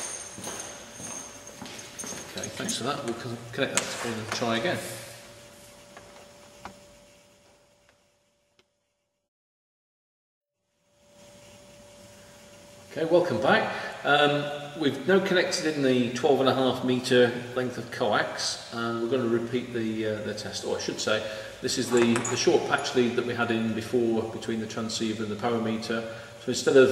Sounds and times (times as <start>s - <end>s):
Speech: 2.4s - 4.9s, 12.9s - 26.9s.